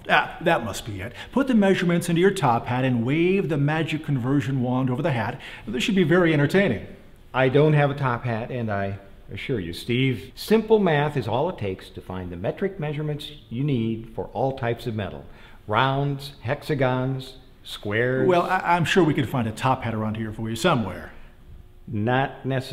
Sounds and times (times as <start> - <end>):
Speech: 0.0 - 21.2, 21.9 - 22.7.